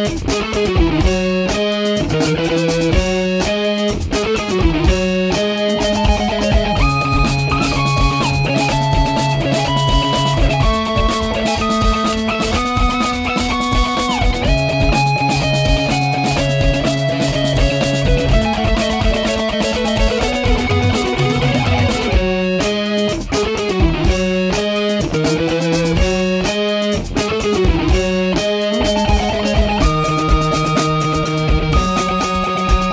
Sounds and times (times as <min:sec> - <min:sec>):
Electric guitar: 0:00.0 - 0:32.9.